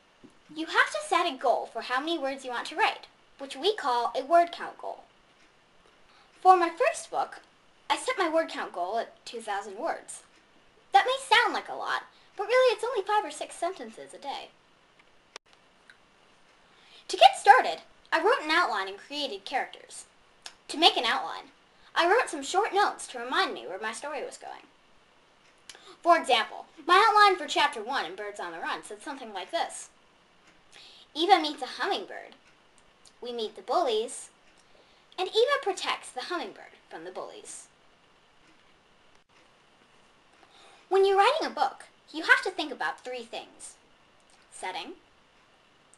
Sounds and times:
Speech: 0.5 - 5.1, 6.4 - 10.3, 10.9 - 14.6, 17.1 - 24.7, 25.7 - 30.0, 31.1 - 32.4, 33.1 - 34.4, 35.2 - 37.8, 40.9 - 43.8, 44.5 - 45.0.

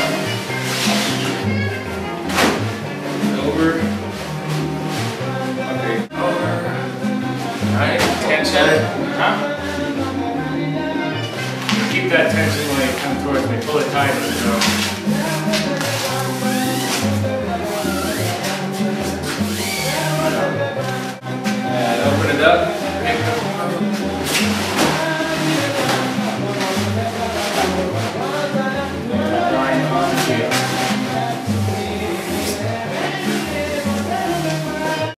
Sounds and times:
Music: 0.0 - 35.1.

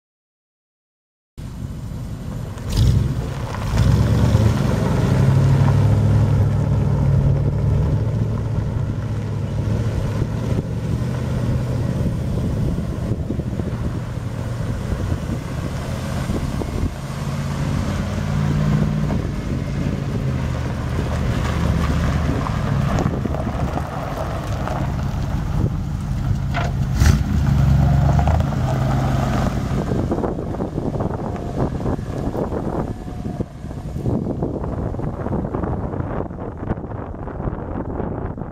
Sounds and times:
Truck: 1.4 - 38.5.

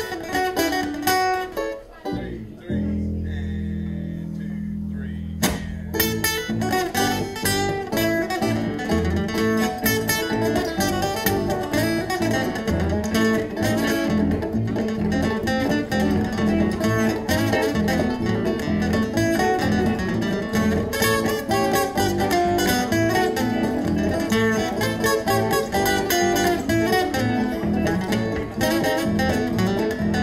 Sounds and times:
Blues: 0.0 - 30.2
Rhythm and blues: 0.0 - 30.2.

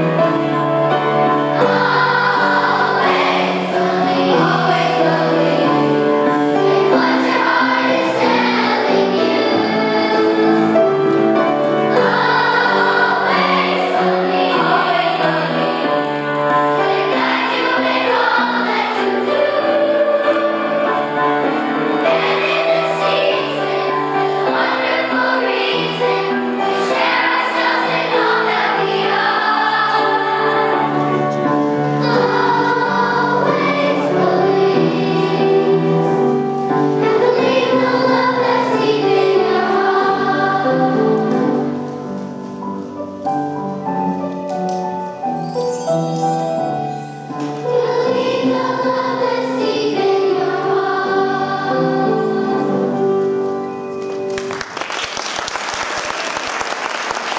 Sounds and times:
Choir: 0.0 - 42.2, 46.2 - 53.8.

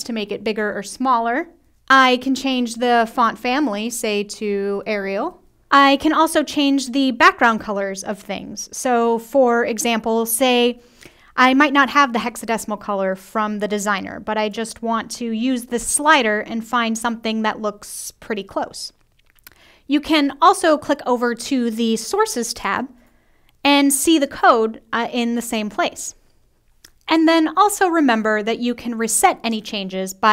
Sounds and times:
Speech: 0.0 - 10.8, 11.4 - 19.0, 19.9 - 22.9, 23.7 - 26.2, 27.1 - 30.3.

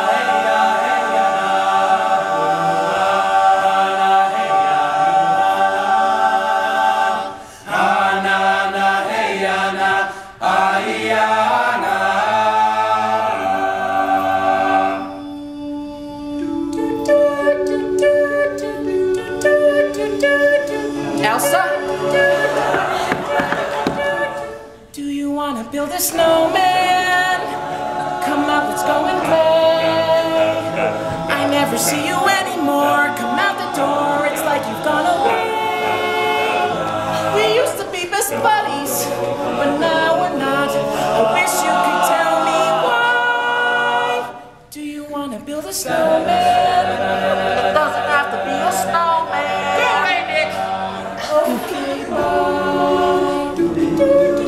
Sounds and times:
Music: 0.0 - 54.4.

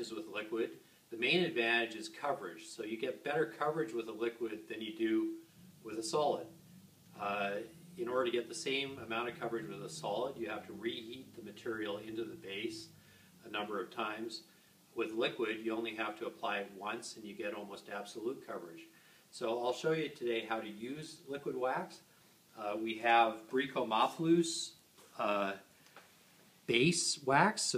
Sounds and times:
Speech: 0.0 - 6.6, 7.2 - 25.7, 26.7 - 27.7.

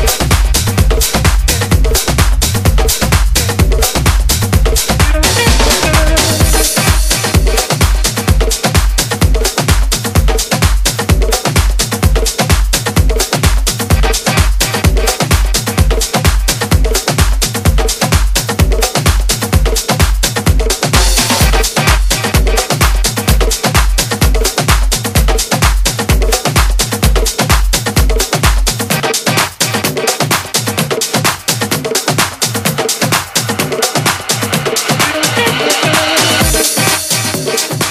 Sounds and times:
Dance music: 0.0 - 37.9
Electronic music: 0.0 - 37.9.

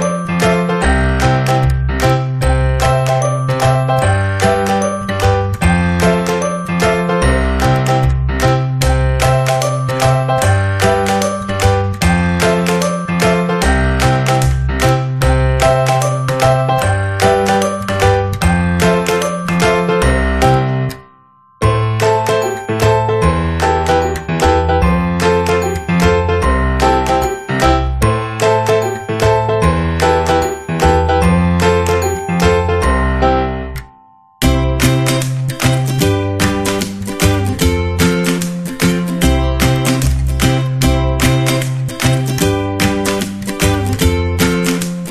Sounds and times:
Music: 0.0 - 45.1.

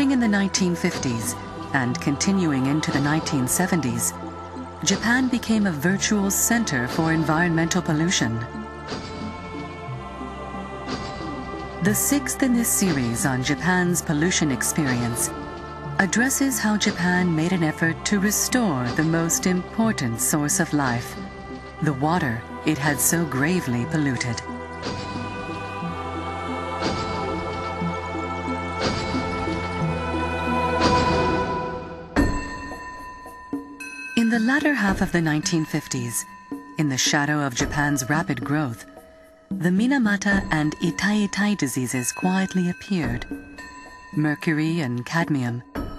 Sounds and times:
Speech: 0.0 - 4.2, 4.8 - 8.5, 11.8 - 15.3, 16.0 - 21.2, 21.8 - 24.4, 34.2 - 38.9, 39.5 - 43.3, 44.2 - 45.7
Music: 0.0 - 45.9.

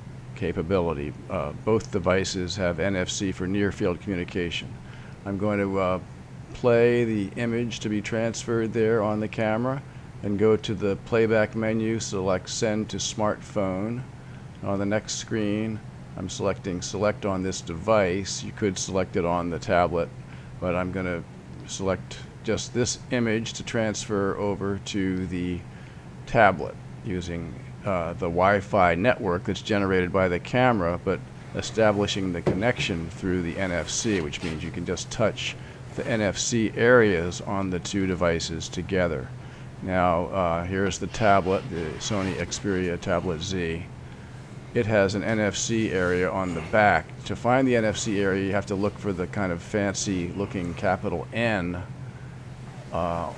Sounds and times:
Speech: 0.4 - 25.7, 26.3 - 43.9, 44.8 - 51.9, 52.9 - 53.3.

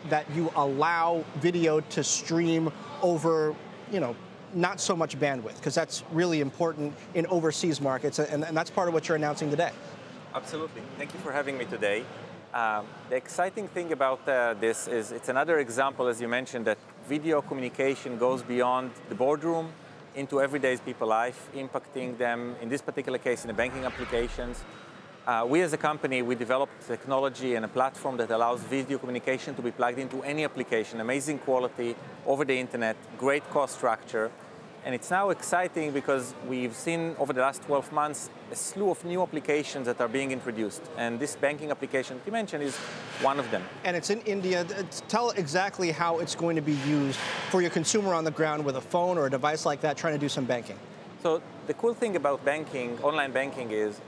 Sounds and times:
Speech: 0.0 - 9.8, 10.4 - 12.0, 12.6 - 24.6, 25.3 - 54.0.

